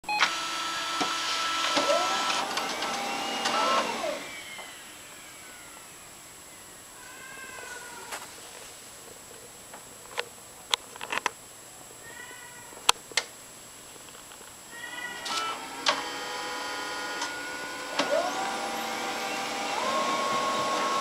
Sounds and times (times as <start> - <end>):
Printer: 0.1 - 5.0, 15.2 - 21.0.